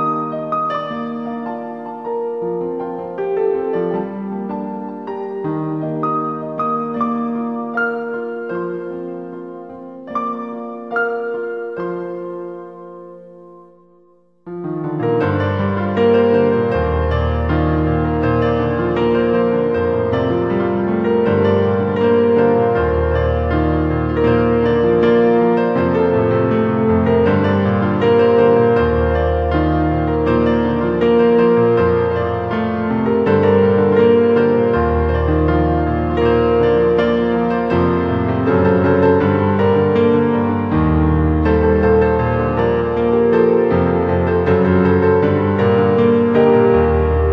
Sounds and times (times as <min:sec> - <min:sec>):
Piano: 0:00.0 - 0:47.3.